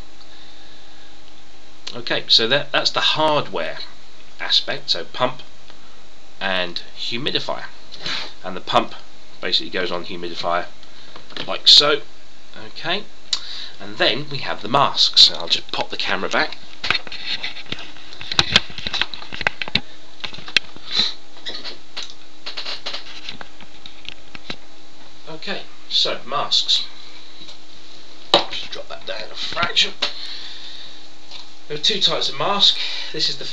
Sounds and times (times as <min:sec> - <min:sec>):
Speech: 0:01.9 - 0:05.5, 0:06.4 - 0:07.8, 0:08.4 - 0:10.8, 0:11.4 - 0:13.1, 0:13.8 - 0:16.6, 0:25.2 - 0:26.9, 0:28.4 - 0:30.0, 0:31.7 - 0:33.5.